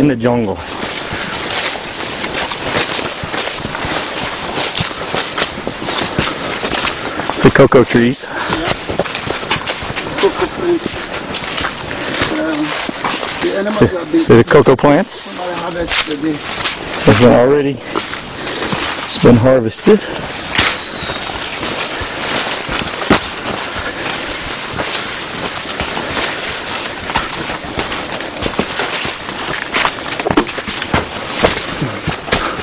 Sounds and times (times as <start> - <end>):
Speech: 0.0 - 0.6, 7.4 - 8.7, 13.4 - 16.4, 17.0 - 17.8, 19.1 - 20.1.